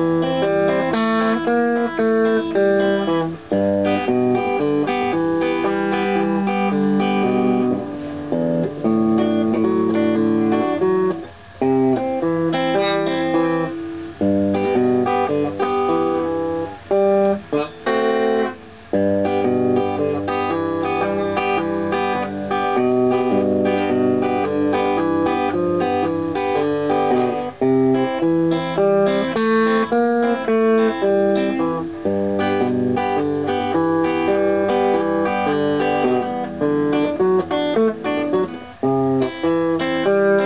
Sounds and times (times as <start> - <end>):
Guitar: 0.0 - 40.4.